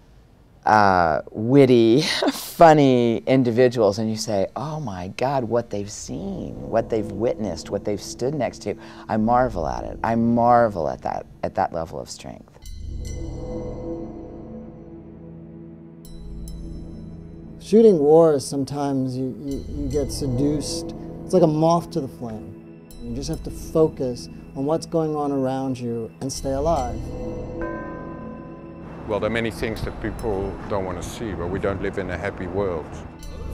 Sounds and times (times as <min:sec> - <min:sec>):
Music: 0:03.0 - 0:33.5.